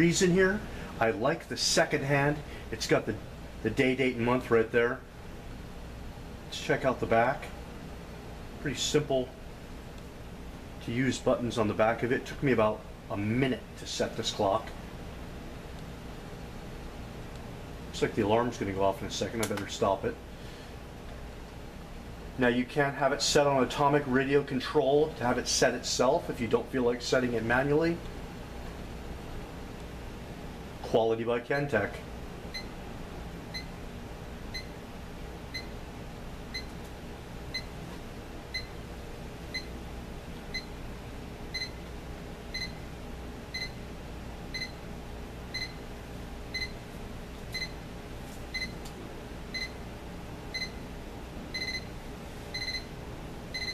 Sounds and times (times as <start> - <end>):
Speech: 0.0 - 5.1, 6.5 - 7.6, 8.6 - 9.4, 10.8 - 14.8, 17.9 - 20.2, 22.4 - 28.1, 30.8 - 32.1.